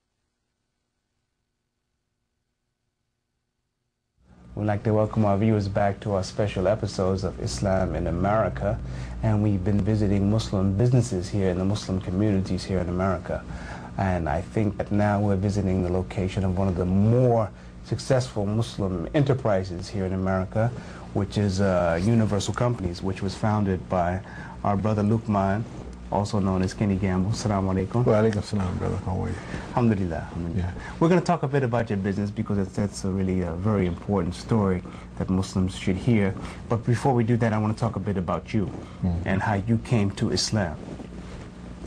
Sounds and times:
Speech: 4.6 - 40.8.

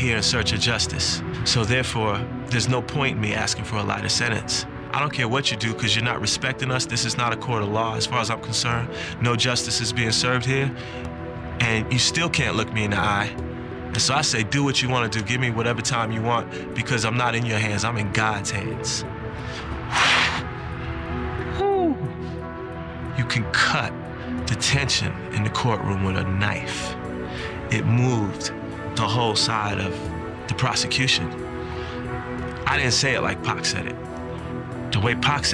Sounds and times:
Male speech, man speaking: 0.0 - 10.8, 11.6 - 19.1, 23.2 - 27.0, 27.7 - 31.4, 32.6 - 34.0, 34.9 - 35.5
Music: 0.0 - 35.5
Narration, monologue: 0.0 - 35.5.

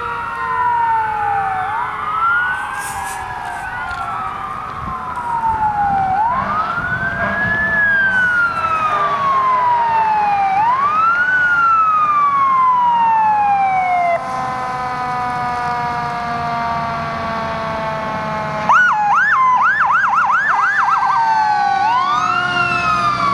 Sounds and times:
Emergency vehicle: 0.0 - 23.3.

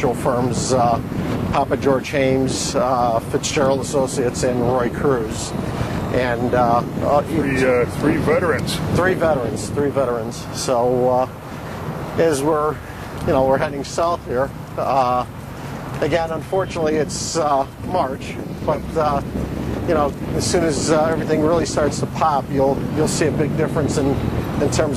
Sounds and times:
Speech: 0.0 - 11.3, 12.2 - 15.3, 16.0 - 19.2, 19.9 - 24.9.

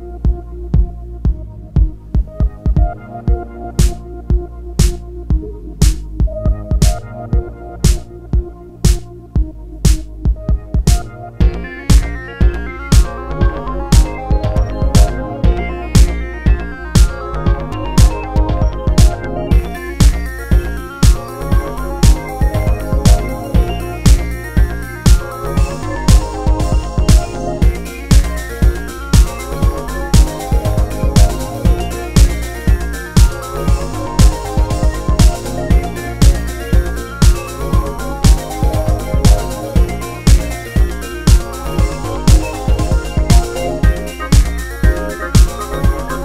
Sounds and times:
Music: 0.0 - 46.2.

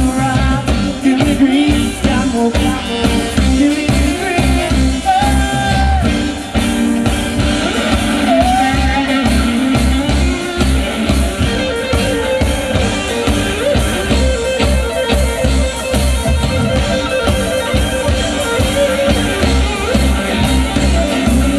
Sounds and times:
Funk: 0.0 - 21.5.

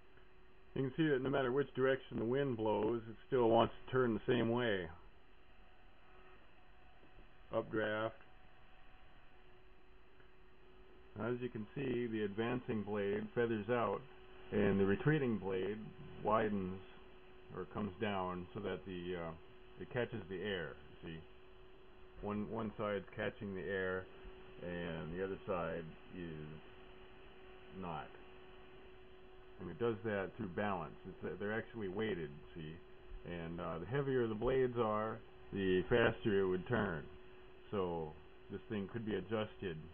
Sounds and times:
Speech: 0.8 - 5.1, 7.5 - 8.2, 11.2 - 21.3, 22.2 - 26.7, 27.7 - 28.2, 29.6 - 39.9.

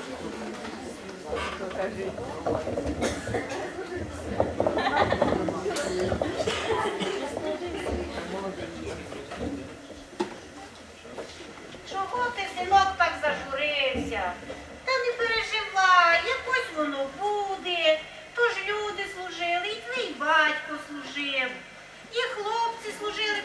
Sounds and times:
Speech: 11.9 - 23.4.

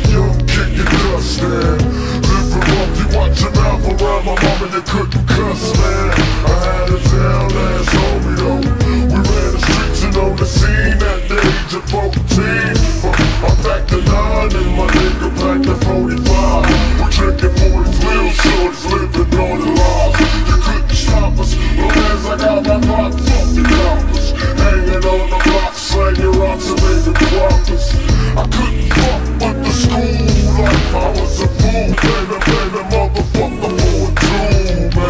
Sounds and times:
Music: 0.0 - 35.0.

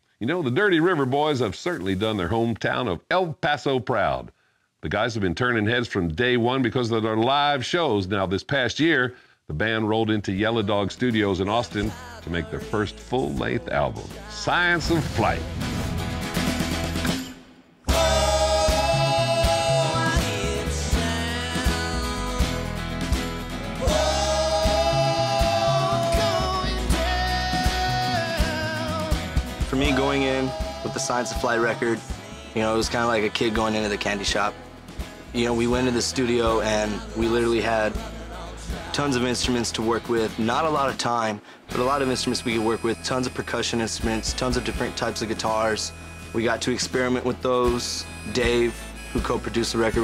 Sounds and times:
Speech: 0.2 - 15.5, 29.7 - 34.6, 35.4 - 38.0, 38.8 - 50.0
Independent music: 10.9 - 50.0.

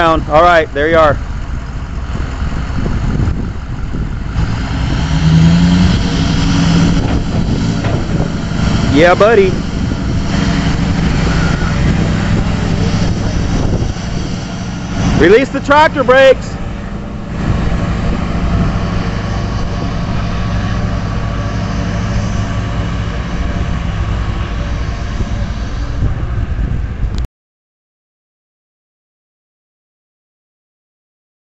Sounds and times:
Speech: 0.0 - 1.2, 8.9 - 9.6, 15.2 - 16.6
Truck: 0.0 - 27.3.

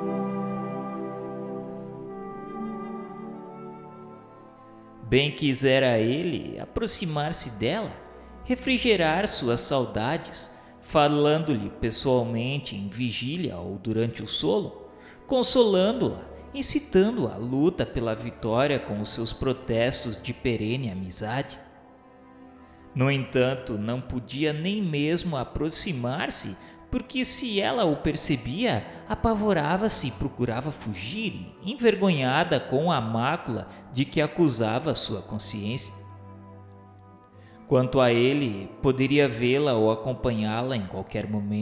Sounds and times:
Music: 0.0 - 41.6
Speech: 5.0 - 21.6, 23.0 - 36.0, 37.7 - 41.6.

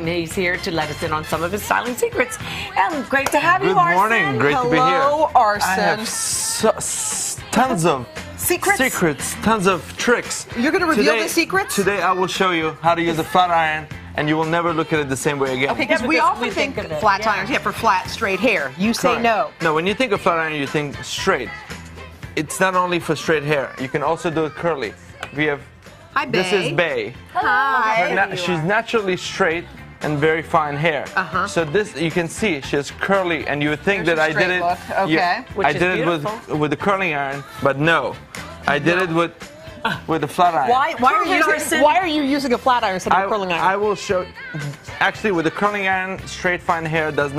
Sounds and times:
Music: 0.0 - 47.3.

